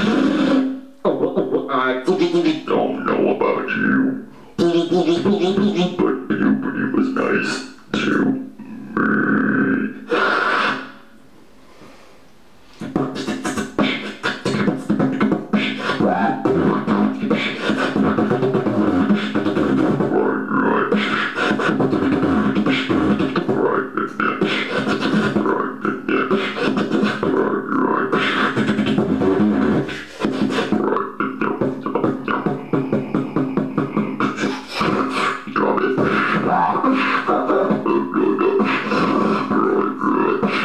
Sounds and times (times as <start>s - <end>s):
Dubstep: 0.0s - 0.8s, 12.8s - 40.6s.